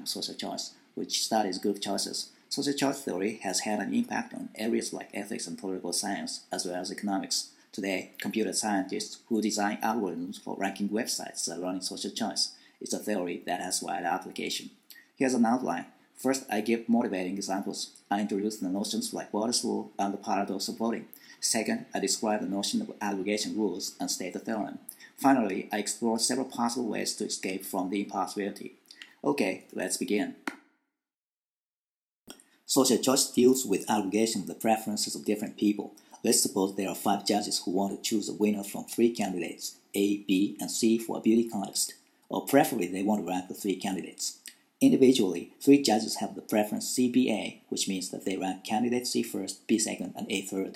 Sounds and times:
Speech: 0:00.0 - 0:30.4, 0:32.7 - 0:50.7.

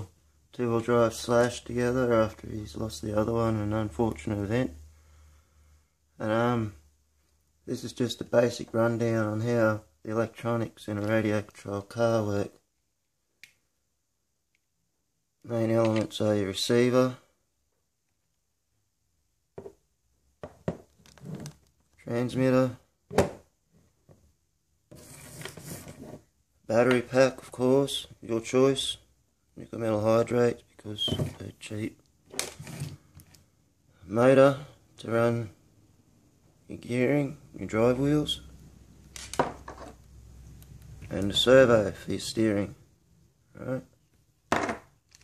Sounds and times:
Speech: 0:00.0 - 0:04.8, 0:06.2 - 0:06.8, 0:07.7 - 0:12.6, 0:15.4 - 0:17.3, 0:22.0 - 0:22.9, 0:26.7 - 0:32.0, 0:34.0 - 0:35.6, 0:36.6 - 0:38.5, 0:41.1 - 0:42.8, 0:43.5 - 0:44.0.

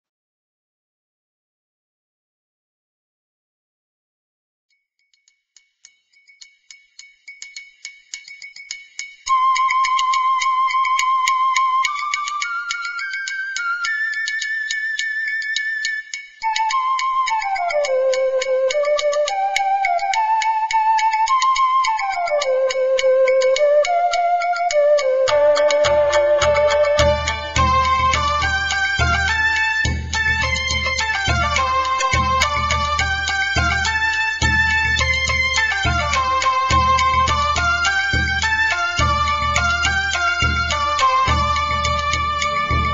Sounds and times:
Music: 0:05.2 - 0:42.9.

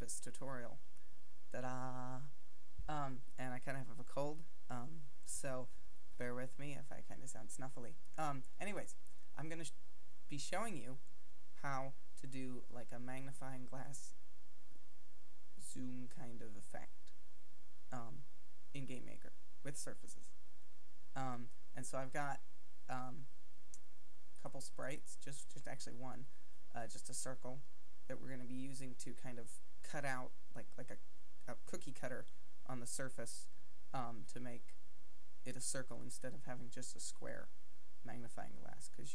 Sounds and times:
Speech: 0:00.0 - 0:00.8, 0:01.6 - 0:11.0, 0:11.6 - 0:14.1, 0:15.6 - 0:17.0, 0:17.9 - 0:18.2, 0:18.8 - 0:20.2, 0:21.2 - 0:23.2, 0:24.4 - 0:34.7, 0:35.5 - 0:37.5, 0:38.1 - 0:39.1.

